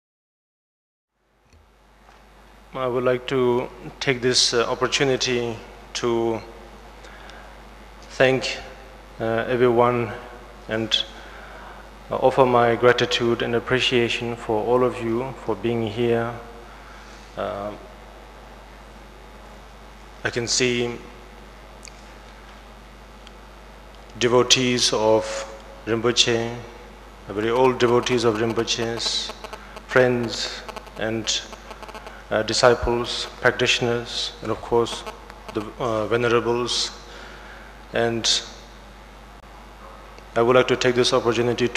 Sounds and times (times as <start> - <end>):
Narration, monologue: 1.6 - 41.7
Male speech, man speaking: 2.8 - 6.5, 8.1 - 11.1, 12.1 - 16.5, 17.4 - 17.9, 20.3 - 21.1, 24.2 - 31.5, 32.3 - 37.0, 37.9 - 38.5, 40.4 - 41.7.